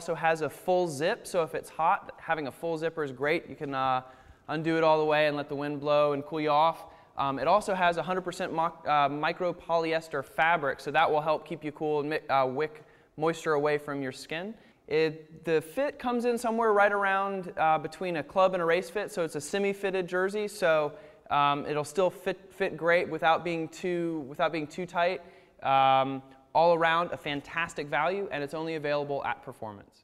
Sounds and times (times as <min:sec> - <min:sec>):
Speech: 0:00.0 - 0:30.0.